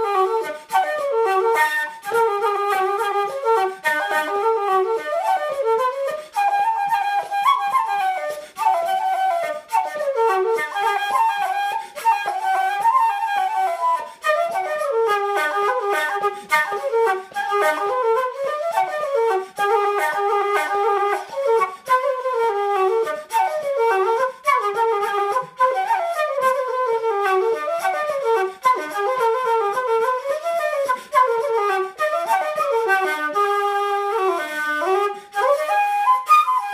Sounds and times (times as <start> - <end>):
Flute: 0.0 - 36.7
Inside, small room: 0.0 - 36.7.